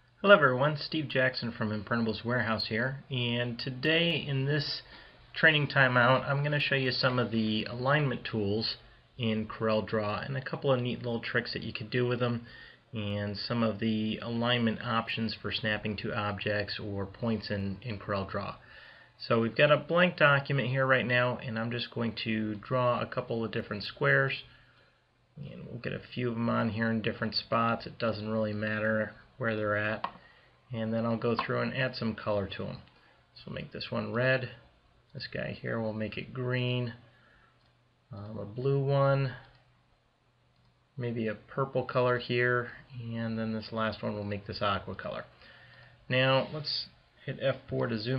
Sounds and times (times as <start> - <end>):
Speech: 0.2 - 24.5, 25.4 - 37.1, 38.1 - 39.6, 41.0 - 45.4, 46.1 - 48.1.